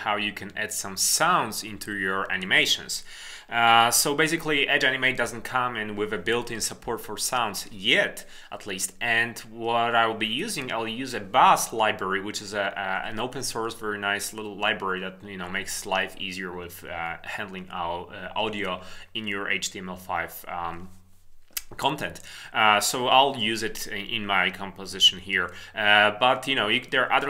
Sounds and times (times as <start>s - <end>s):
Speech: 0.0s - 21.0s, 21.6s - 27.2s.